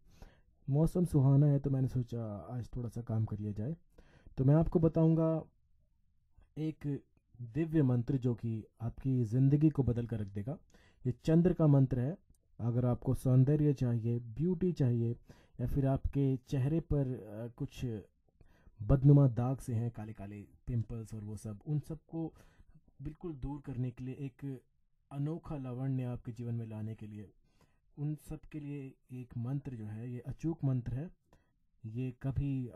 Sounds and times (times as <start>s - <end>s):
Speech: 0.7s - 3.8s, 4.4s - 5.5s, 6.6s - 18.1s, 18.8s - 22.4s, 23.0s - 27.4s, 28.0s - 31.2s, 31.9s - 32.7s.